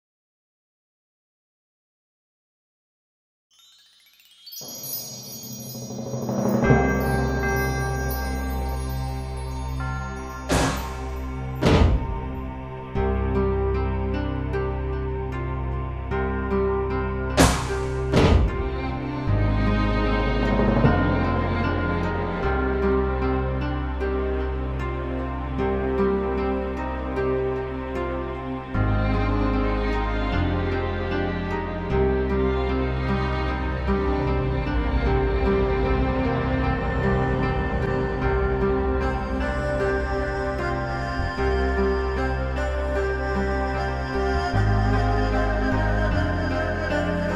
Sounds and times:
Music: 3.5 - 47.3.

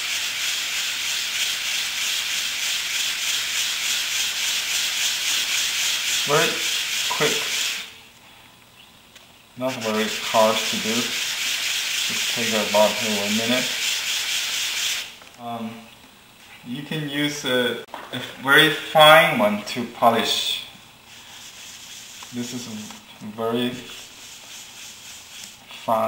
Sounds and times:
Rub: 0.0 - 8.0, 9.6 - 15.1, 21.1 - 23.0, 23.7 - 26.0
Sanding: 0.0 - 8.0, 9.6 - 15.2, 21.1 - 22.8, 23.8 - 25.9.

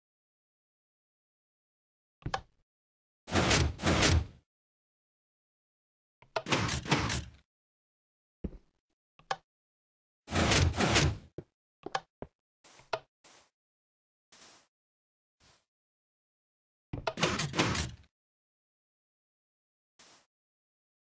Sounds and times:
Sliding door: 3.3 - 4.4, 6.5 - 7.3, 10.3 - 11.3, 17.2 - 18.0.

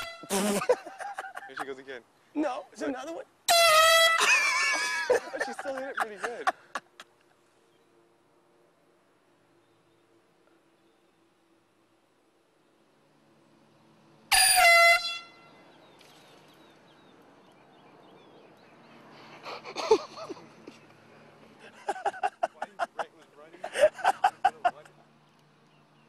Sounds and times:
Air horn, truck horn: 0.0 - 0.5, 3.5 - 5.1, 14.3 - 15.6
Speech: 5.4 - 6.5, 22.5 - 23.6.

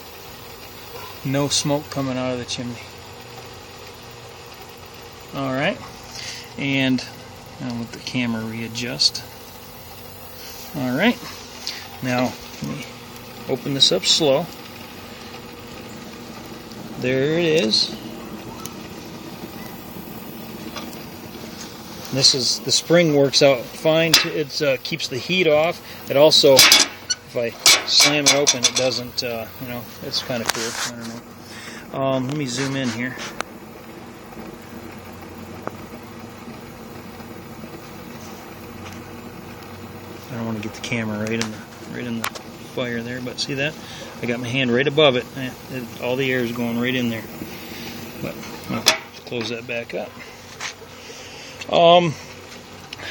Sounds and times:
Boiling: 0.0 - 53.1
Outside, urban or manmade: 0.0 - 53.1
Speech: 1.2 - 2.9, 5.3 - 5.8, 6.6 - 9.3, 10.8 - 11.3, 12.0 - 12.9, 13.5 - 14.5, 17.0 - 18.0, 22.1 - 31.2, 31.9 - 33.3, 40.3 - 47.3, 48.2 - 50.2, 51.7 - 52.2.

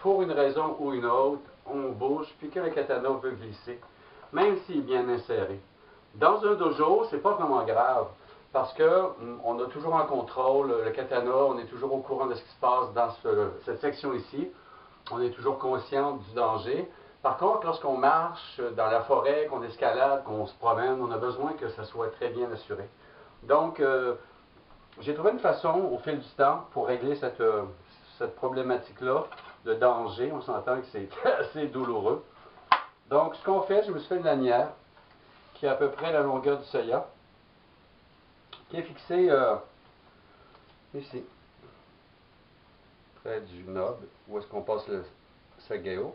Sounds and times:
Speech: 0.0 - 24.3, 24.9 - 32.3, 33.1 - 34.8, 35.5 - 37.2, 38.6 - 39.8, 40.9 - 41.8, 43.2 - 46.1.

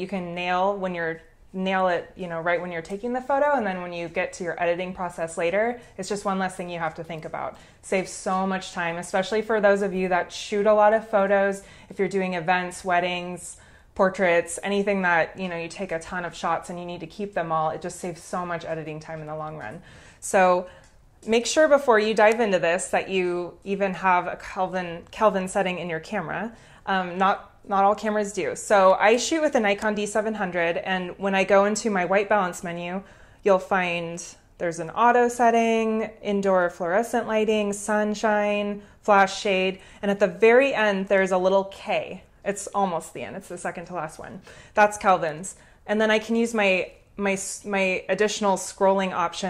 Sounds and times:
Speech: 0.0 - 49.5.

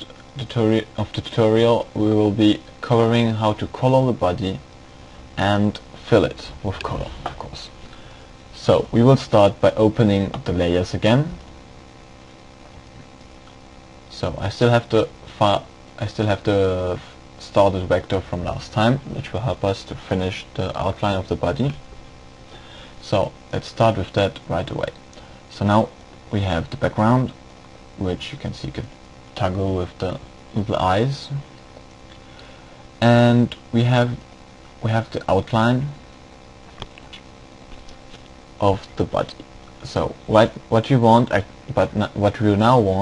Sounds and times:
Speech: 0.0 - 4.6, 5.4 - 7.8, 8.6 - 11.4, 14.1 - 21.8, 23.0 - 27.4, 28.0 - 31.5, 33.0 - 34.2, 34.8 - 36.0, 38.6 - 43.0.

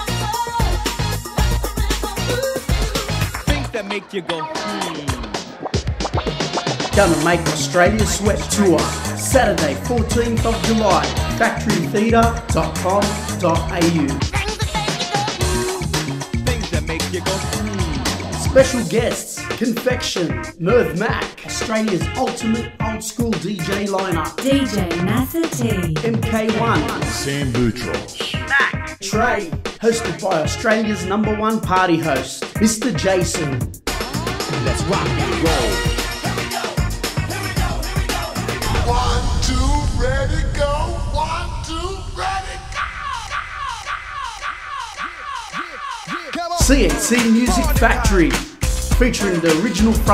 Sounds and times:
Pop music: 0.0 - 40.4, 42.2 - 50.1.

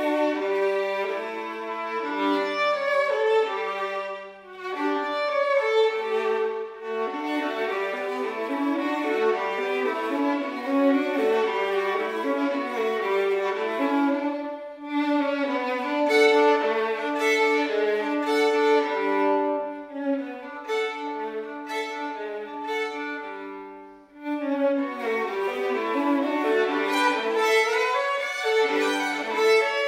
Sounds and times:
Violin, fiddle: 0.0 - 29.8.

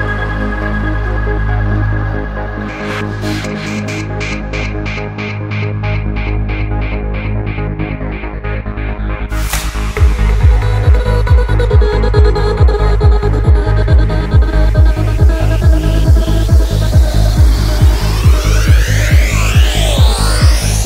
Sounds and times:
Techno: 0.0 - 20.8
Trance music: 0.0 - 20.8.

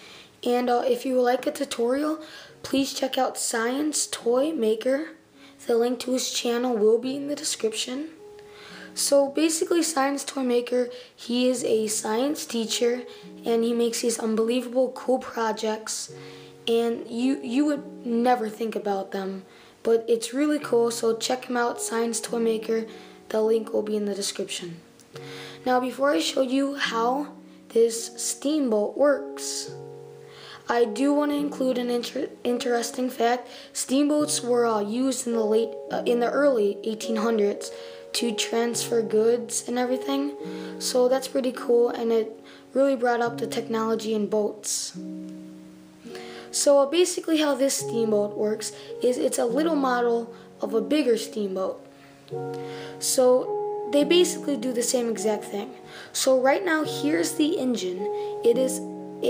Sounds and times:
Music: 0.0 - 59.2
Speech: 0.4 - 8.2, 9.0 - 24.8, 25.6 - 29.7, 30.7 - 45.1, 46.5 - 51.8, 53.0 - 59.2.

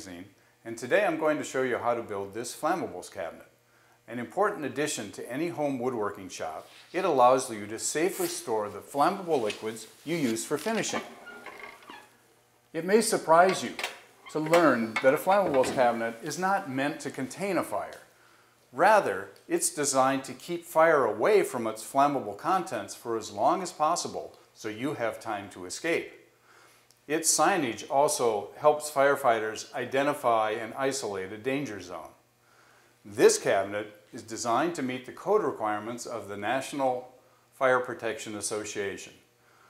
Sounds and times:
Speech: 0.0 - 3.5, 4.1 - 11.1, 12.7 - 18.1, 18.8 - 26.2, 27.1 - 32.2, 33.1 - 39.2.

